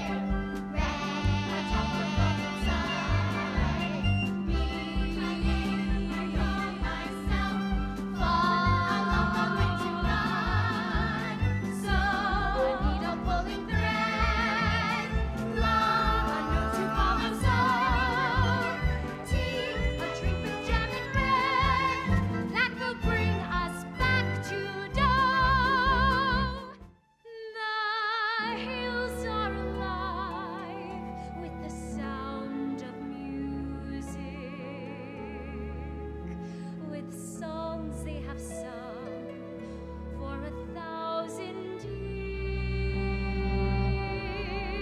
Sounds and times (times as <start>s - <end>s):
Funny music: 0.0s - 27.0s.